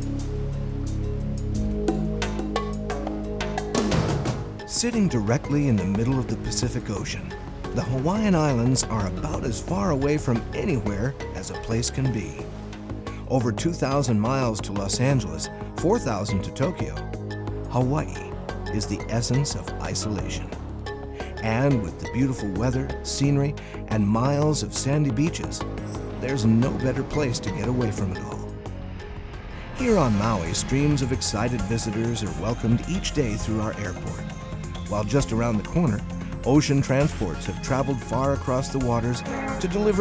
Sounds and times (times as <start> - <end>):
Music: 0.0 - 40.0
Speech: 4.7 - 12.4, 13.3 - 17.0, 17.7 - 20.5, 21.4 - 25.6, 26.2 - 28.5, 29.8 - 34.2, 34.9 - 40.0.